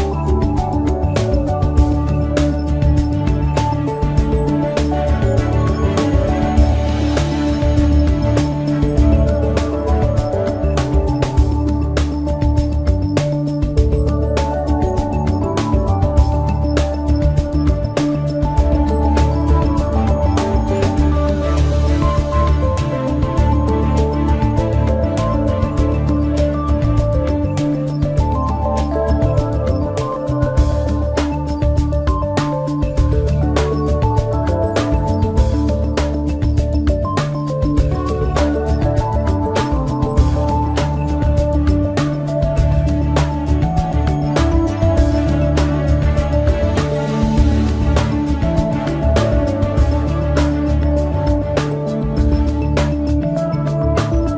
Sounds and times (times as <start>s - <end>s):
Music: 0.0s - 54.3s.